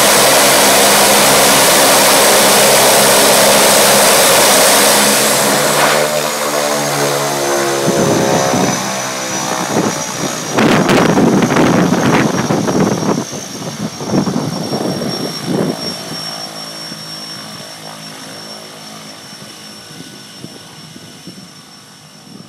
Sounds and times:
Propeller, airscrew: 0.0 - 22.4.

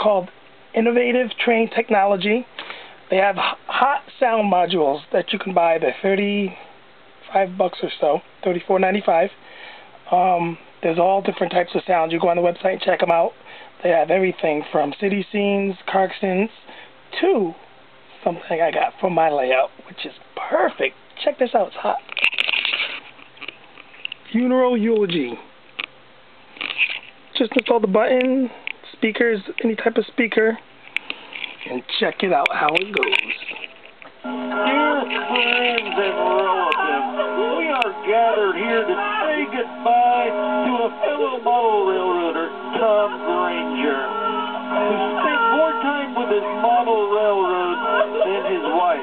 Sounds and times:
Speech: 0.0 - 2.5, 3.1 - 6.6, 7.2 - 9.4, 10.1 - 17.6, 18.2 - 22.1, 24.3 - 25.5, 27.3 - 30.6, 31.6 - 33.6.

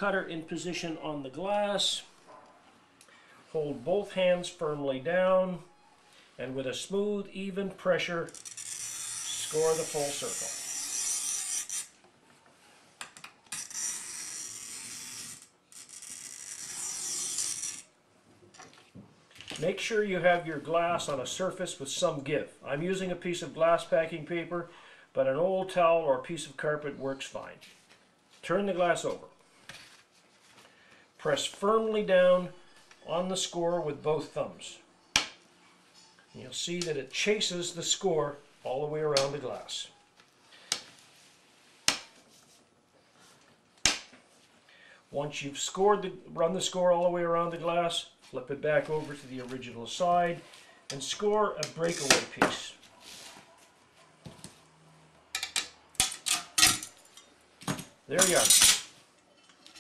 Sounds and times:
Speech: 0.0 - 2.1, 3.5 - 5.7, 6.4 - 8.3, 9.4 - 10.5, 19.6 - 27.6, 28.4 - 29.3, 31.2 - 34.8, 36.4 - 39.9, 45.1 - 52.8, 58.1 - 58.7.

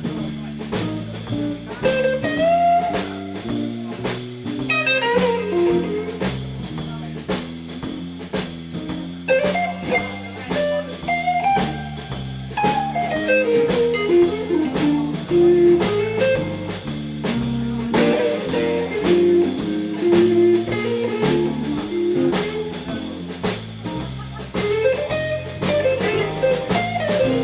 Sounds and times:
Blues: 0.0 - 27.4.

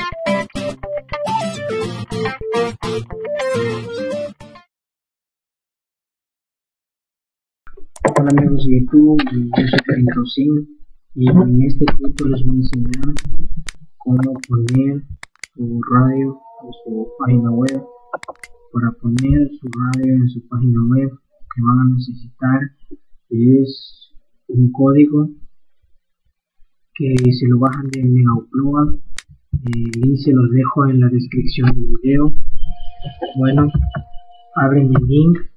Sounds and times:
Speech: 8.0 - 13.4, 14.0 - 22.7, 23.3 - 25.4, 27.0 - 29.0, 29.6 - 32.4, 33.0 - 34.0, 34.6 - 35.5.

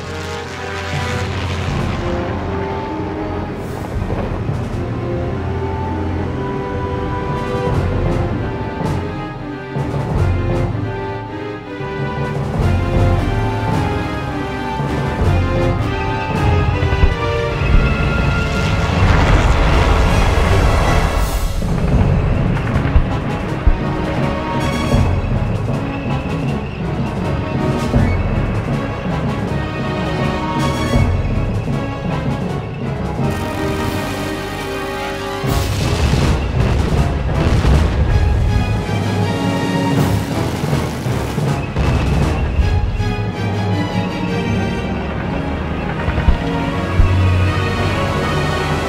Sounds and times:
Music: 0.0 - 48.8.

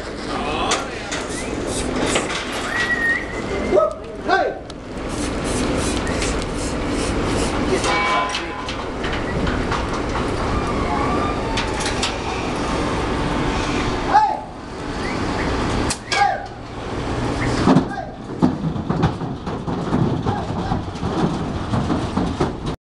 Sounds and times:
Speech: 3.7 - 4.6, 17.8 - 18.2, 20.2 - 20.8.

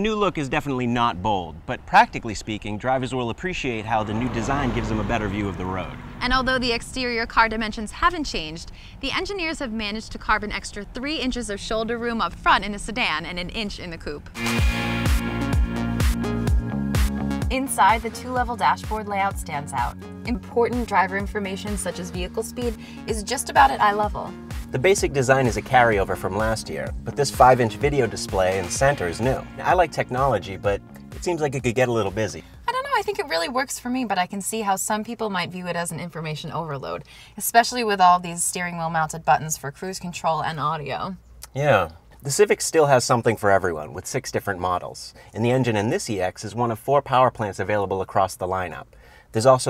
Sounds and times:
Speech: 0.0 - 14.2, 17.5 - 48.8, 49.4 - 49.6
Car passing by: 3.5 - 6.8.

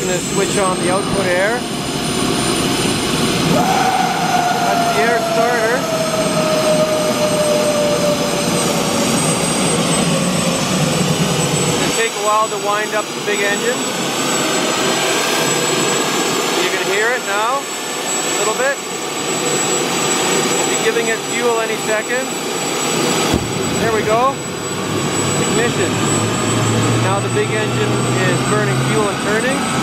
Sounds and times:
Speech: 0.0 - 1.6, 4.7 - 5.9, 11.8 - 13.8, 16.5 - 17.7, 18.4 - 18.8, 20.6 - 22.3, 23.8 - 24.4, 25.5 - 26.0, 27.0 - 29.7
Jet engine: 0.0 - 29.8.

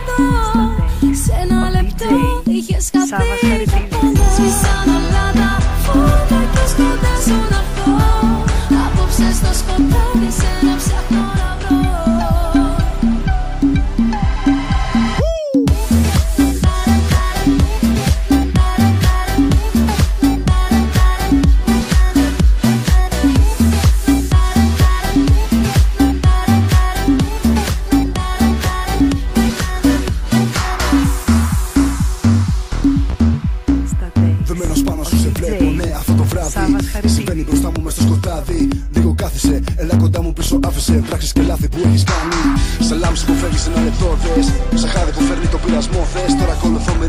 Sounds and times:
Afrobeat: 0.0 - 47.0
Speech: 0.7 - 4.4, 33.9 - 38.1.

